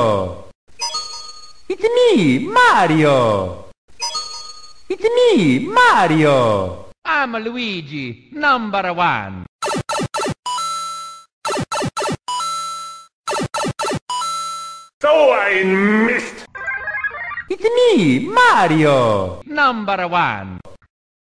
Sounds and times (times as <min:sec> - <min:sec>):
Speech: 0:00.0 - 0:00.4, 0:01.7 - 0:03.6, 0:04.9 - 0:09.4, 0:15.0 - 0:16.5, 0:17.5 - 0:20.6.